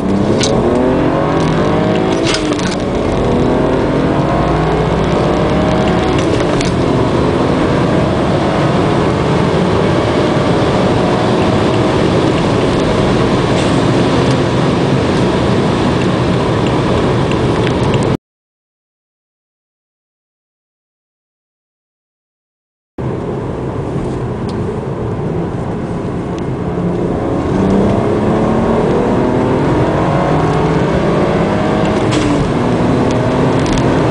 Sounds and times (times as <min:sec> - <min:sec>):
Car: 0:00.0 - 0:18.2, 0:23.0 - 0:34.1.